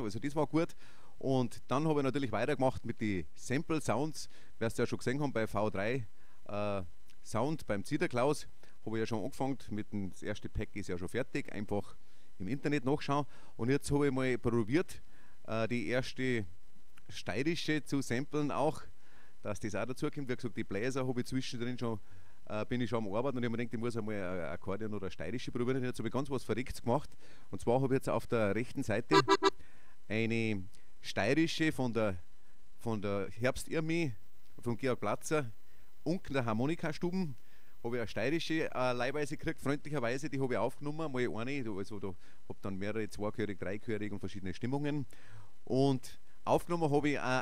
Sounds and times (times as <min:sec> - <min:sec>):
Speech: 0:00.0 - 0:16.5, 0:17.1 - 0:29.5, 0:30.1 - 0:32.2, 0:32.8 - 0:45.1, 0:45.7 - 0:47.4.